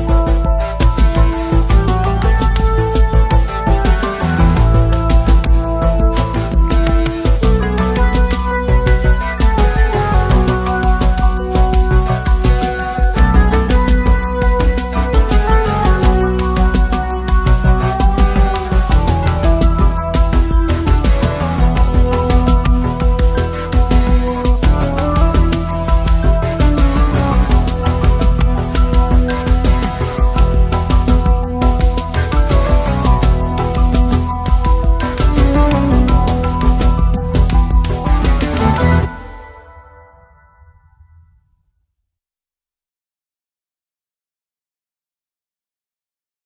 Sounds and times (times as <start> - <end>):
Music: 0.0 - 41.8.